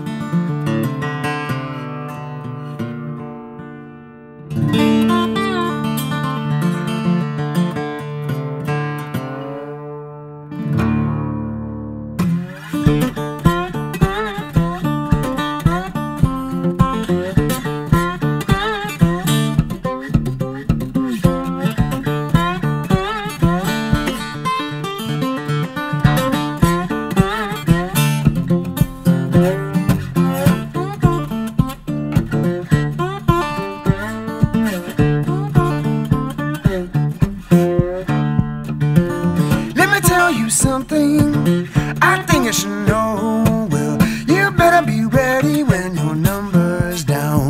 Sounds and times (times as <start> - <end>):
Acoustic guitar: 0.0 - 47.4.